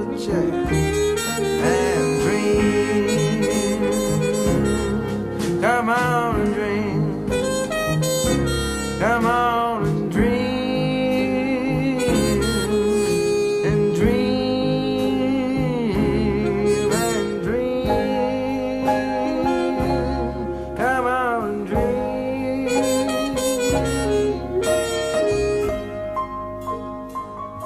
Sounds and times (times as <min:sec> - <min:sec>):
Harmonica: 0:00.0 - 0:05.8, 0:07.3 - 0:09.4, 0:11.8 - 0:14.6, 0:16.3 - 0:20.7, 0:22.6 - 0:26.2.